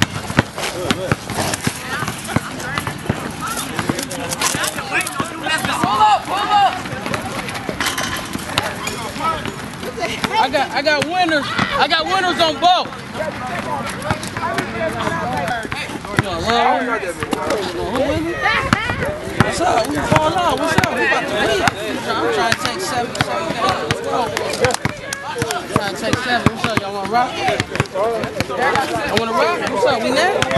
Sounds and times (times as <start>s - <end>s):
Speech: 0.7s - 30.5s.